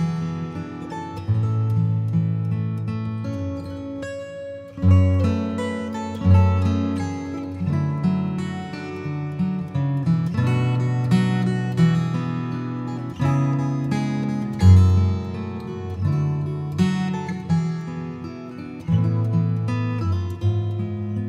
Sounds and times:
Acoustic guitar: 0.0s - 21.2s.

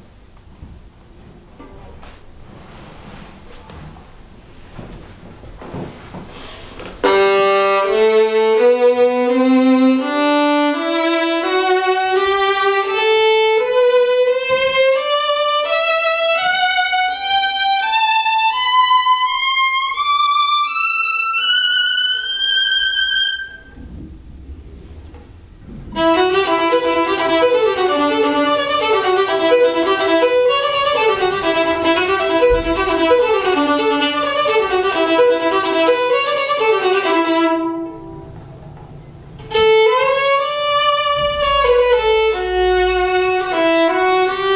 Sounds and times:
Violin, fiddle: 7.0s - 23.8s, 25.9s - 38.0s, 39.4s - 44.5s.

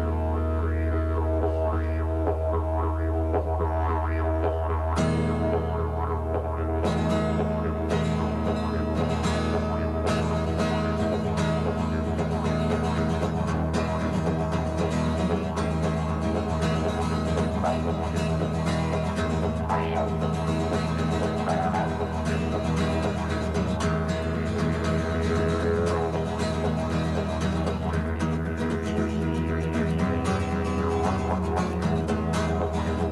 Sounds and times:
Banjo: 0.0s - 33.1s
Country: 0.0s - 33.1s
Didgeridoo: 0.0s - 33.1s.

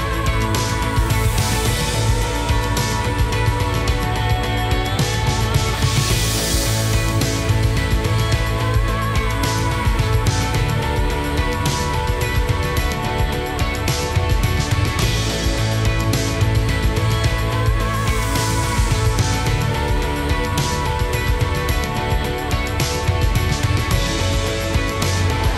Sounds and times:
Music: 0.0s - 25.5s.

